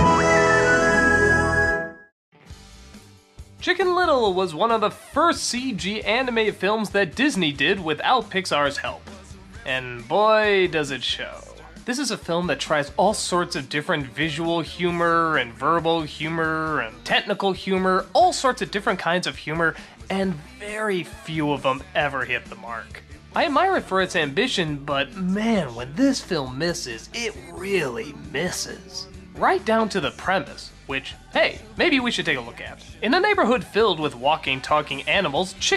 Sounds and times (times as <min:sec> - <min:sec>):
Music: 0:00.0 - 0:35.7
Speech: 0:03.6 - 0:35.7.